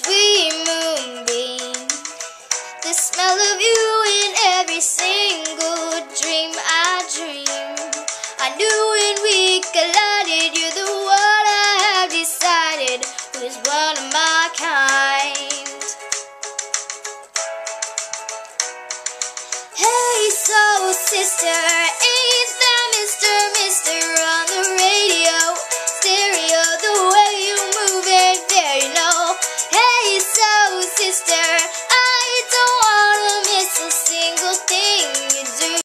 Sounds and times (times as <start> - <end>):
Female singing: 0.0 - 2.1, 2.8 - 15.8, 19.8 - 35.8
Music: 0.0 - 35.8.